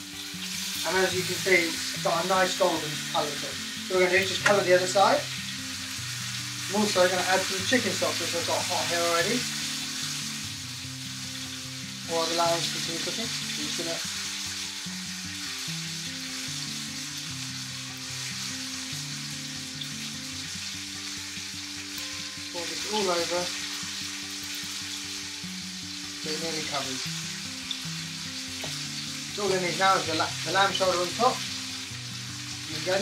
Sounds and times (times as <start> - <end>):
Music: 0.0 - 33.0
Speech: 0.8 - 5.2, 6.7 - 9.4, 12.1 - 14.0, 22.6 - 23.5, 26.2 - 27.0, 29.4 - 31.4, 32.7 - 33.0.